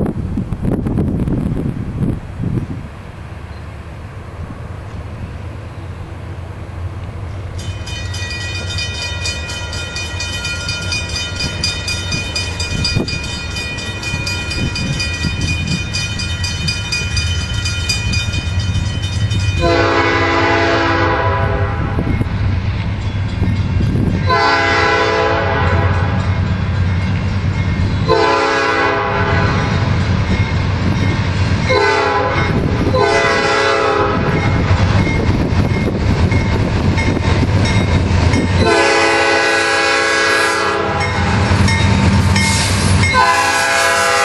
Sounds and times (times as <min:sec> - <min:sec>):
Outside, urban or manmade: 0:00.0 - 0:44.2
Train: 0:00.0 - 0:44.2
Vehicle horn, car horn, honking: 0:19.6 - 0:21.8, 0:24.3 - 0:26.0, 0:43.2 - 0:44.2.